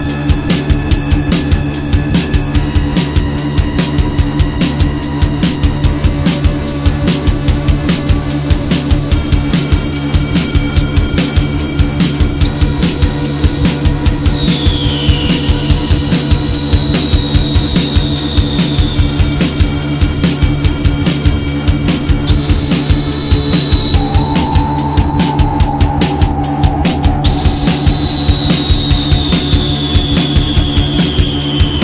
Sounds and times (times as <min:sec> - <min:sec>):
Jazz: 0:00.0 - 0:31.8.